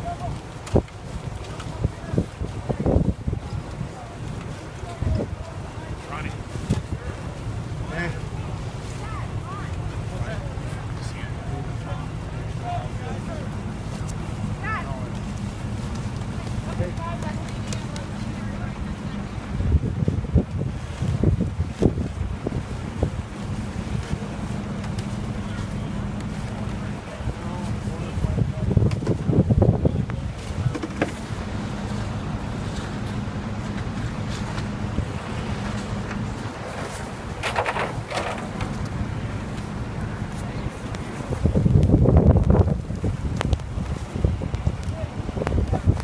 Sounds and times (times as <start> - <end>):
Speech: 0.0 - 15.4, 16.0 - 19.7, 25.1 - 30.7, 44.6 - 46.0
Wind: 0.0 - 46.0.